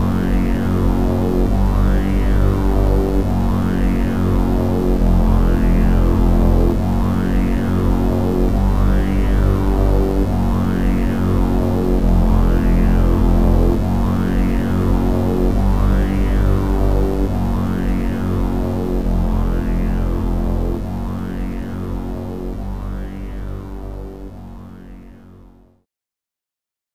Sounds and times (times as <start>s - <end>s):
Music: 0.0s - 25.9s.